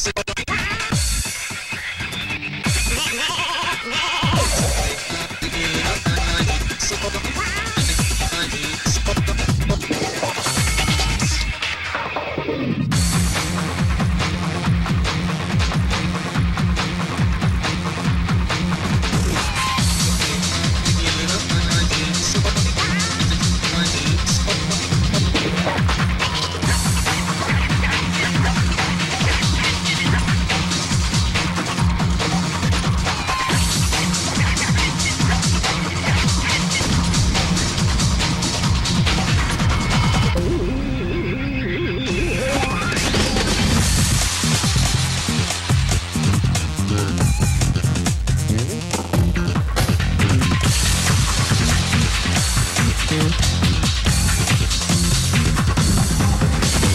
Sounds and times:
Music: 0.0s - 56.9s
Sound effect: 3.9s - 6.7s, 24.7s - 46.3s.

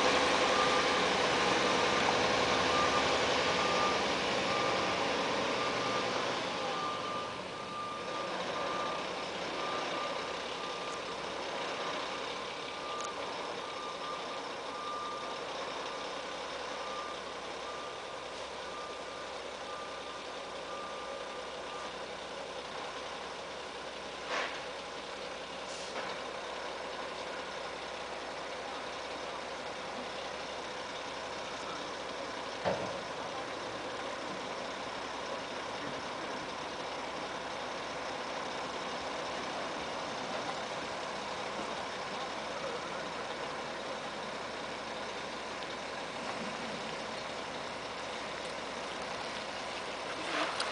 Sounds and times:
Reversing beeps: 0.0s - 22.2s, 31.5s - 34.4s.

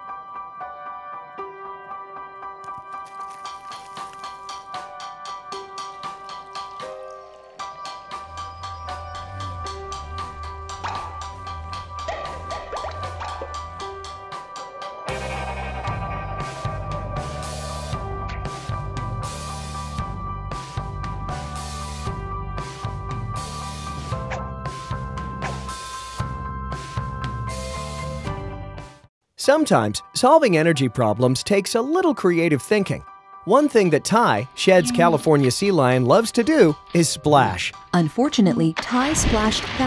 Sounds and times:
Music: 0.0s - 39.8s
Speech: 29.4s - 39.8s.

